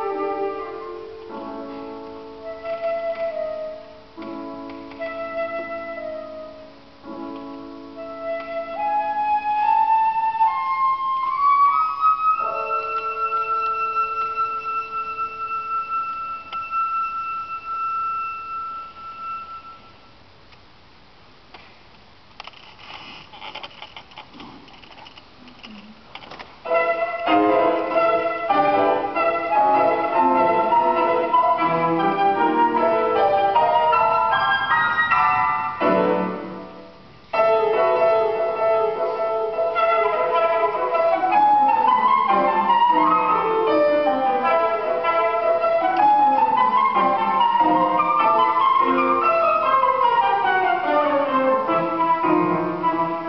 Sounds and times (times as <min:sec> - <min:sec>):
Flute: 0:00.0 - 0:06.8, 0:07.9 - 0:20.1, 0:26.7 - 0:35.8, 0:37.4 - 0:53.2.